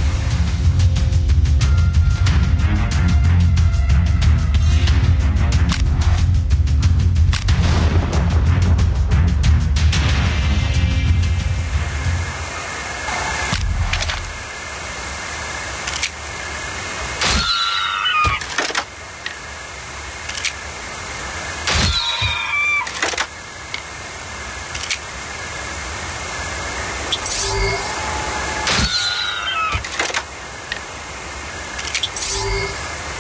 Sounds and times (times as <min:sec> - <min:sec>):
Outside, rural or natural: 0:00.0 - 0:33.2.